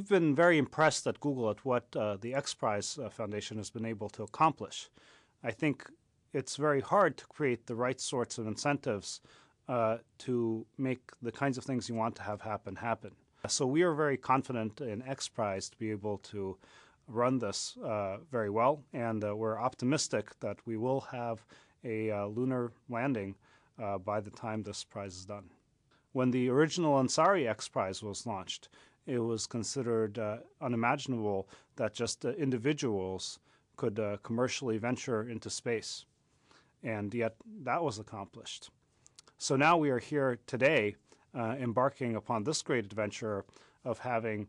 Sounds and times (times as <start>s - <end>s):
Male speech, man speaking: 0.0s - 25.5s, 26.2s - 36.1s, 36.8s - 38.8s, 39.4s - 44.4s
Narration, monologue: 0.0s - 44.4s.